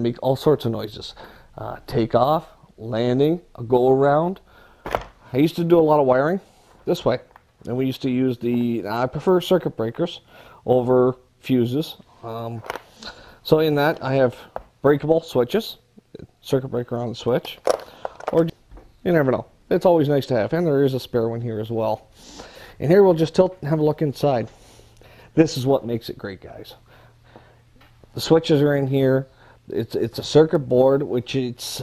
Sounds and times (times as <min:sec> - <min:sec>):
Speech: 0:00.0 - 0:04.4, 0:05.3 - 0:12.7, 0:13.4 - 0:17.6, 0:18.3 - 0:22.1, 0:22.8 - 0:24.5, 0:25.4 - 0:26.8, 0:28.1 - 0:31.8.